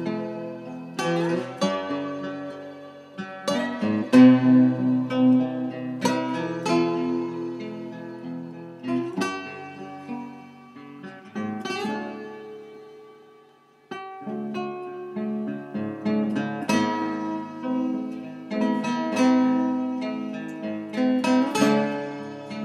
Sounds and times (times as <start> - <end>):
Acoustic guitar: 0.0 - 22.6
Strum: 0.0 - 22.6.